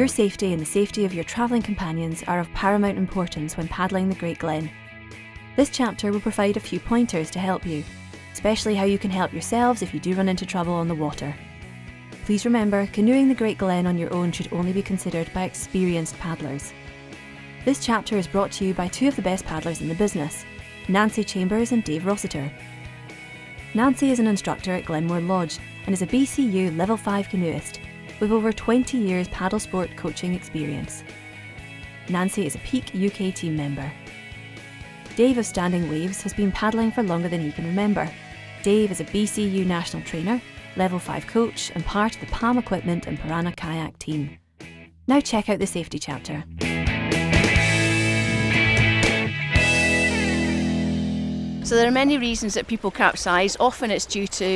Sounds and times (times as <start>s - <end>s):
Speech: 0.0s - 4.7s, 5.6s - 7.8s, 8.4s - 11.4s, 12.2s - 16.7s, 17.6s - 22.5s, 23.7s - 31.0s, 32.1s - 34.0s, 35.1s - 44.4s, 45.1s - 46.4s, 51.6s - 54.5s
Music: 0.0s - 54.5s.